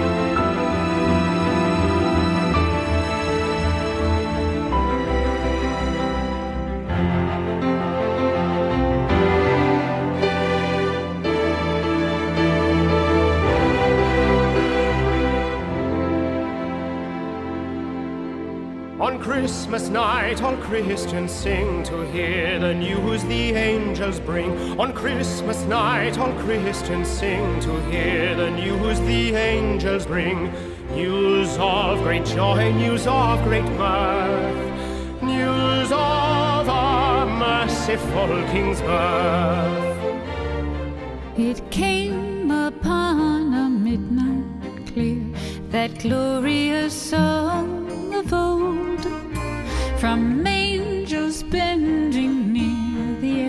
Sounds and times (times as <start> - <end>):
Music: 0.0 - 53.4.